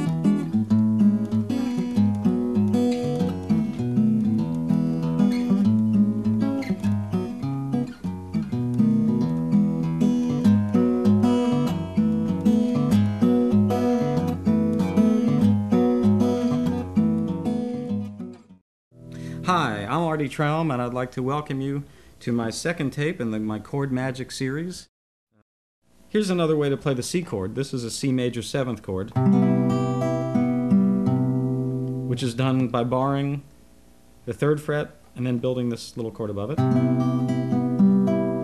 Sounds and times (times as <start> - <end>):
Speech: 19.4 - 24.9, 26.1 - 29.2, 32.1 - 33.5, 34.3 - 36.6.